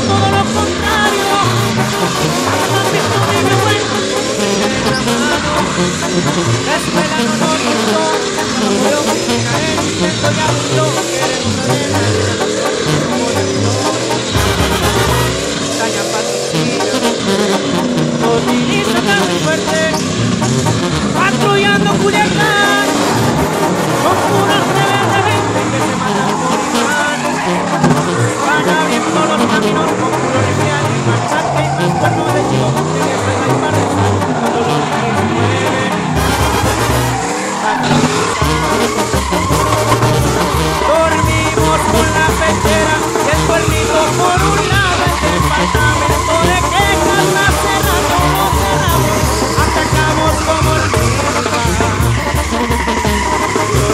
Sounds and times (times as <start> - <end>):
Car: 0.0 - 53.9
Music: 0.0 - 53.9.